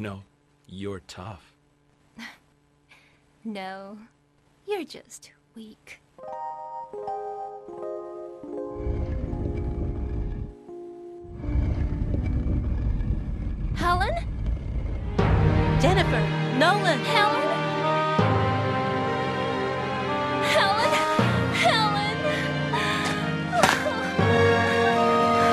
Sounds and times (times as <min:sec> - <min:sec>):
Music: 0:06.2 - 0:12.6, 0:15.0 - 0:25.5.